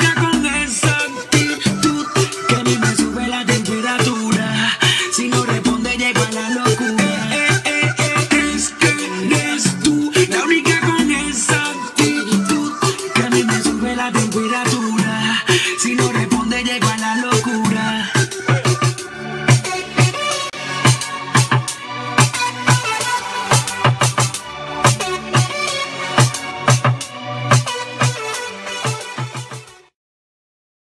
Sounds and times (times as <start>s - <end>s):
Hip hop music: 0.0s - 29.9s.